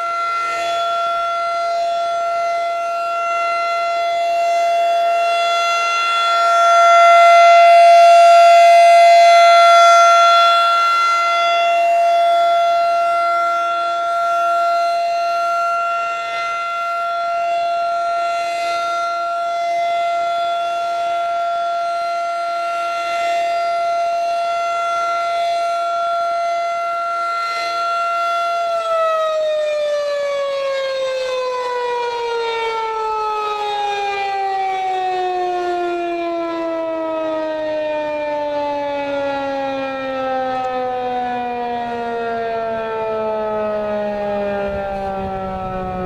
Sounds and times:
Siren: 0.0s - 46.0s.

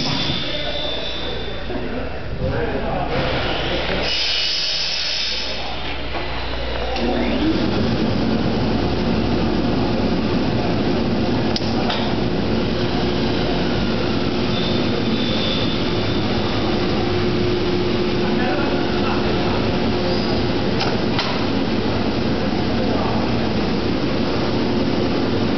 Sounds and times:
Speech: 0.4s - 4.1s, 6.7s - 7.8s, 18.2s - 20.2s, 22.5s - 23.5s.

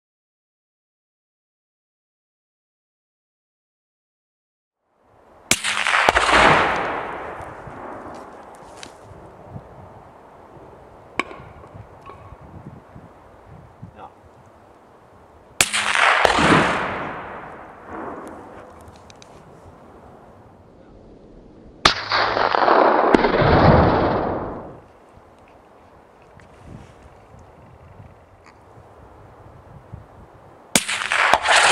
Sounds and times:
Explosion: 5.5s - 8.3s, 15.6s - 18.8s, 20.9s - 24.8s.

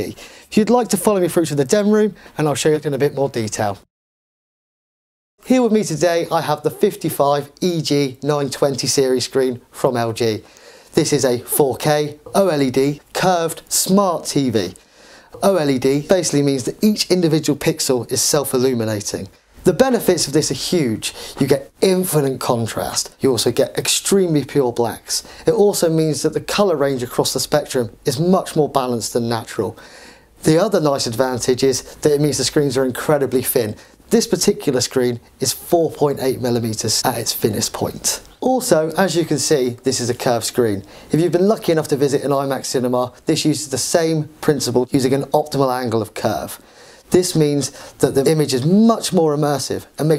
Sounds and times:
Speech: 0.0s - 3.9s, 5.4s - 14.8s, 15.4s - 29.8s, 30.4s - 50.1s.

